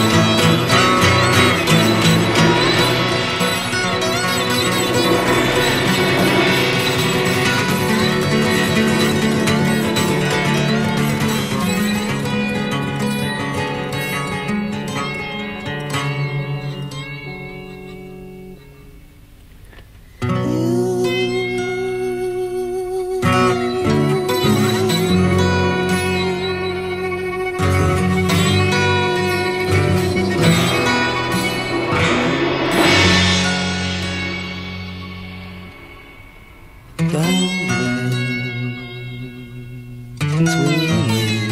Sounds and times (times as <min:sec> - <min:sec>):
Music: 0:00.0 - 0:41.5.